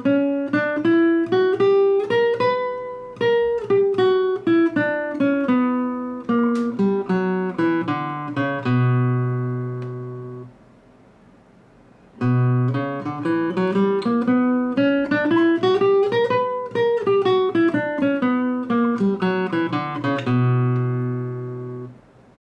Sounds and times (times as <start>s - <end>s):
Guitar: 0.0s - 10.6s, 11.9s - 22.4s.